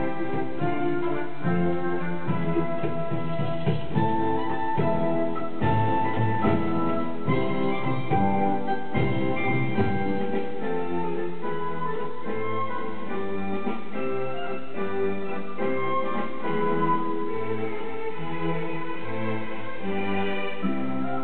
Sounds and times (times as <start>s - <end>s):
Electric piano: 0.0s - 17.5s.